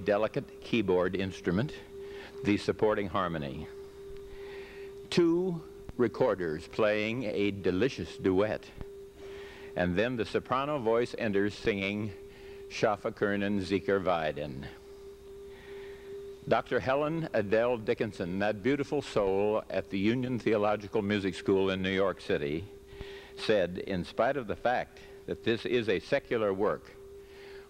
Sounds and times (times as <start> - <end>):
Speech: 0.0 - 3.7, 5.1 - 8.8, 9.8 - 14.8, 16.5 - 22.7, 23.4 - 27.0.